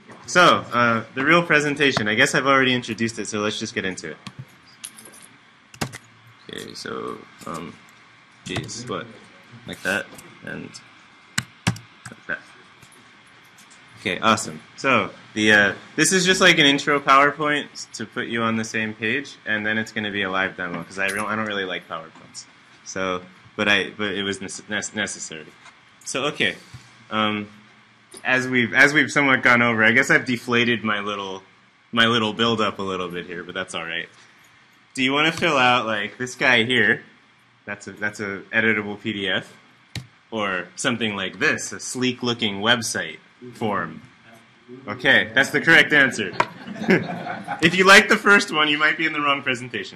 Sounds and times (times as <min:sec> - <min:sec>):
Speech: 0:00.0 - 0:04.3, 0:06.5 - 0:07.8, 0:08.4 - 0:10.9, 0:12.1 - 0:12.6, 0:14.0 - 0:27.6, 0:28.2 - 0:34.2, 0:35.0 - 0:37.1, 0:37.7 - 0:39.6, 0:40.3 - 0:46.5, 0:47.6 - 0:49.9.